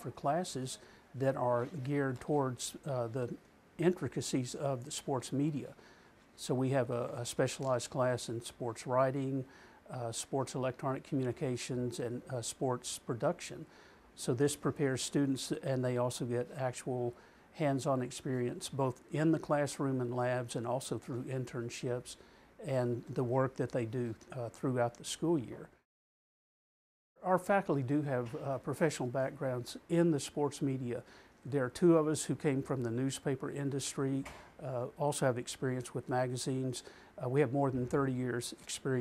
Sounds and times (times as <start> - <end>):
Speech: 0.0 - 5.8, 6.4 - 25.8, 27.2 - 39.0
Inside, small room: 0.0 - 25.9, 27.2 - 39.0.